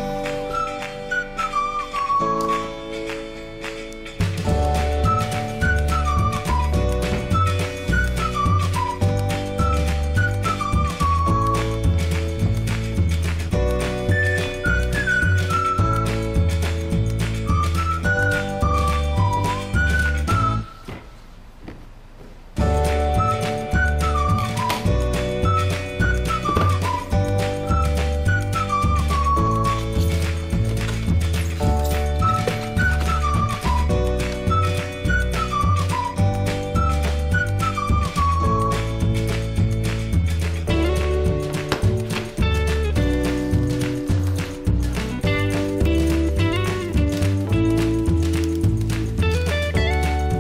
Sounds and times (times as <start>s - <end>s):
Music: 0.0s - 21.1s, 22.6s - 50.4s.